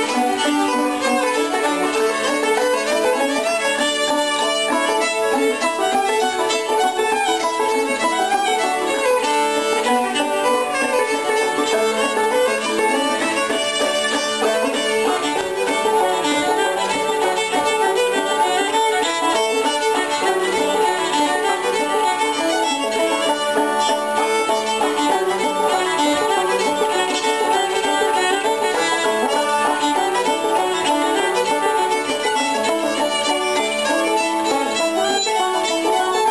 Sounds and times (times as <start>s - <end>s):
Violin, fiddle: 0.0s - 36.3s.